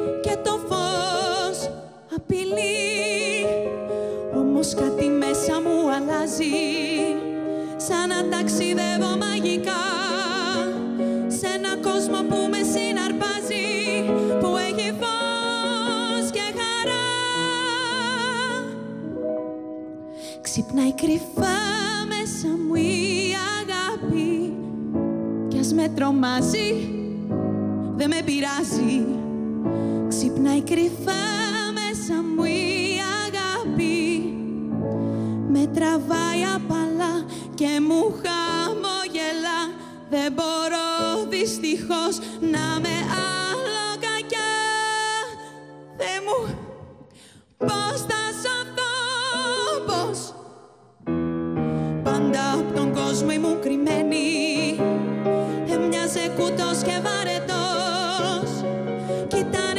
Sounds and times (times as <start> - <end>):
Music: 0.0 - 59.7.